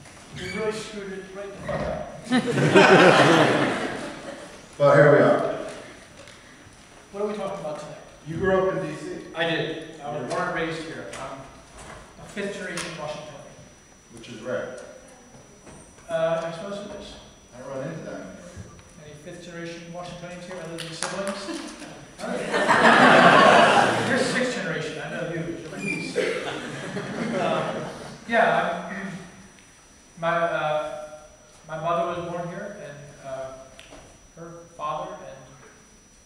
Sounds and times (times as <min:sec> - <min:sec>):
Speech: 0:00.4 - 0:01.7, 0:07.1 - 0:11.5, 0:12.2 - 0:14.8, 0:16.1 - 0:22.4, 0:23.9 - 0:26.2, 0:28.3 - 0:29.3, 0:31.7 - 0:33.7, 0:34.4 - 0:35.6.